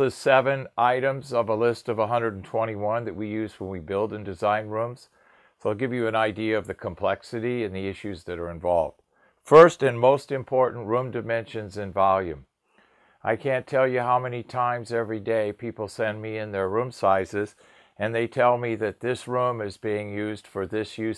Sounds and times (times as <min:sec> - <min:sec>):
Speech: 0:00.0 - 0:12.5, 0:13.2 - 0:21.1.